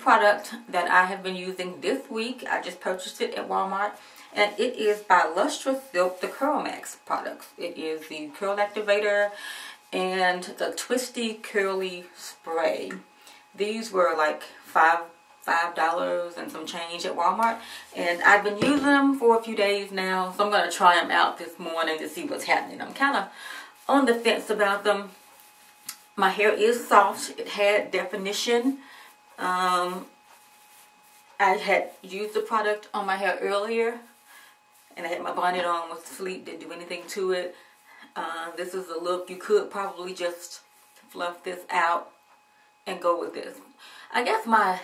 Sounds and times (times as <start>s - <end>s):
Speech: 0.0s - 25.2s, 26.2s - 28.8s, 29.4s - 30.1s, 31.4s - 34.1s, 35.0s - 42.1s, 42.9s - 44.8s.